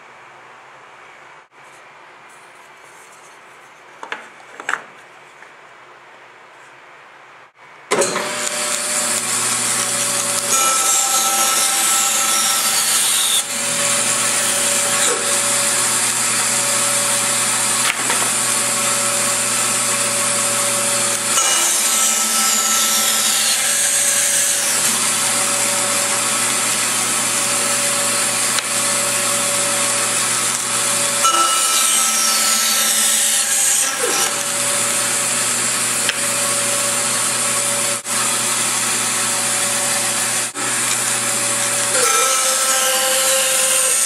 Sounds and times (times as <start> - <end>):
Wood: 2.3 - 5.6, 7.9 - 20.2
Drill: 8.0 - 44.0.